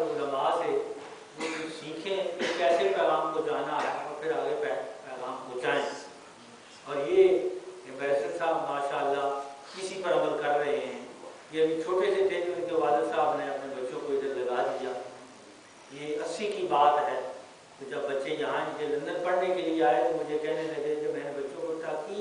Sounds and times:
Male speech, man speaking: 0:00.0 - 0:06.2, 0:06.8 - 0:15.2, 0:15.9 - 0:22.2
Narration, monologue: 0:00.0 - 0:22.2.

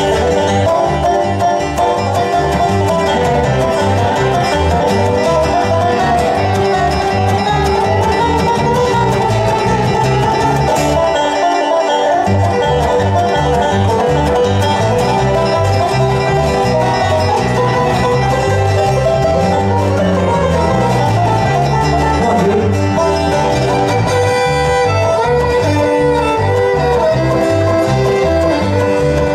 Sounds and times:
Banjo: 0:00.0 - 0:29.3
Guitar: 0:00.0 - 0:29.3
Violin, fiddle: 0:00.0 - 0:29.3.

